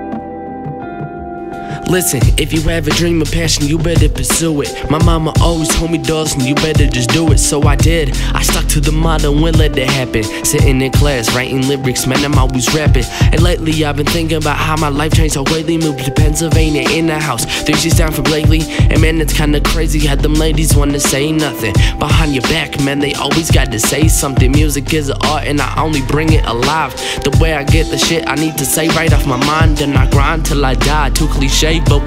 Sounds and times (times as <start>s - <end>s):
Music: 0.0s - 32.0s.